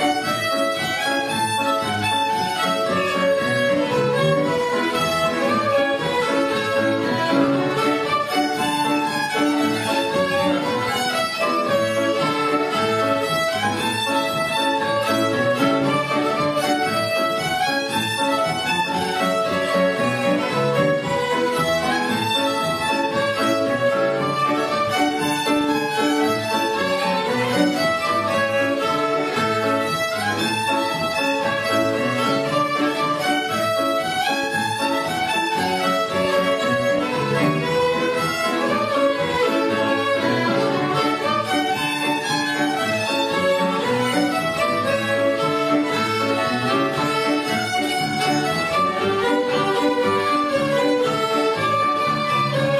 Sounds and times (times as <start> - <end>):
Violin, fiddle: 0.0 - 52.8.